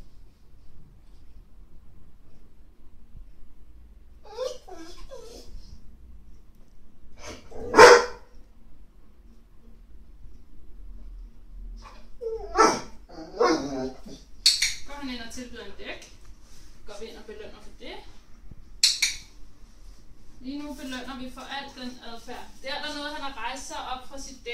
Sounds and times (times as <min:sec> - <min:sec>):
Bark: 0:07.3 - 0:08.3, 0:12.5 - 0:14.0.